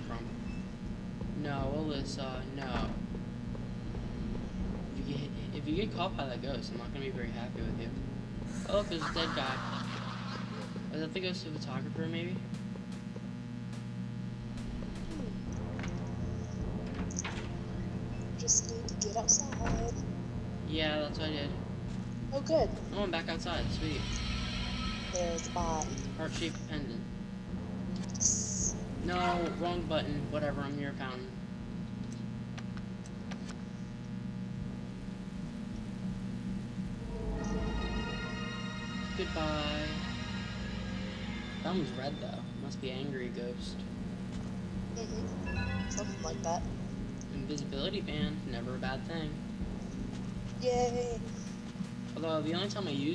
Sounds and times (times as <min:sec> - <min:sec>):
Speech: 0:00.0 - 0:00.4, 0:01.4 - 0:03.0, 0:05.0 - 0:08.0, 0:08.6 - 0:10.0, 0:10.8 - 0:12.4, 0:18.4 - 0:20.0, 0:20.7 - 0:21.6, 0:22.4 - 0:24.1, 0:25.2 - 0:27.1, 0:28.2 - 0:31.4, 0:39.2 - 0:40.1, 0:41.6 - 0:43.8, 0:45.0 - 0:45.3, 0:45.9 - 0:46.7, 0:47.3 - 0:49.4, 0:52.2 - 0:53.1.